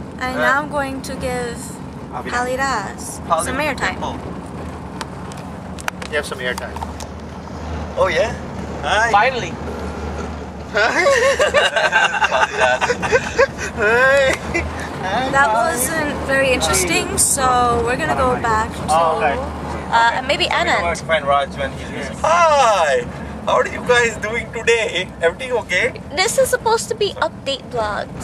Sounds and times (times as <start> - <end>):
Speech: 0.2 - 4.2, 8.0 - 9.5, 15.0 - 28.2.